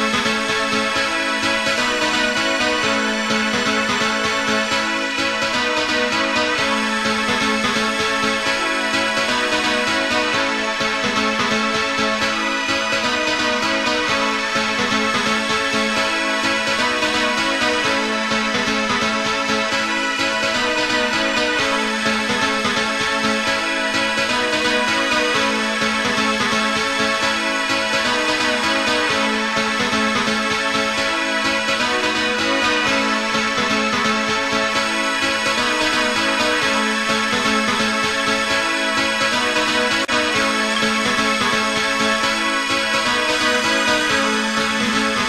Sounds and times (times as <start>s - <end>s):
Music: 0.0s - 45.2s.